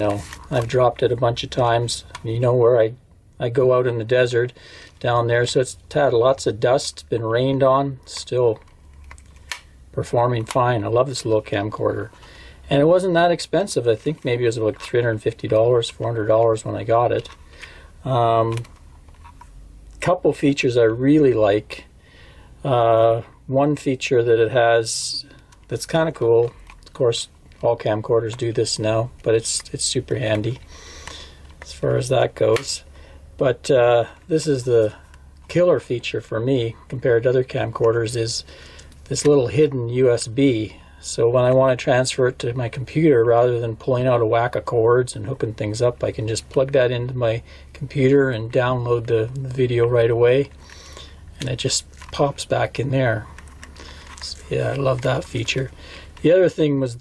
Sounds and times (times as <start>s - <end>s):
Speech: 0.0s - 8.6s, 10.0s - 12.1s, 12.7s - 17.3s, 18.1s - 18.7s, 20.0s - 21.9s, 22.6s - 30.6s, 31.6s - 32.8s, 33.4s - 38.5s, 39.1s - 50.5s, 51.4s - 53.3s, 54.2s - 57.0s
Inside, small room: 0.0s - 57.0s.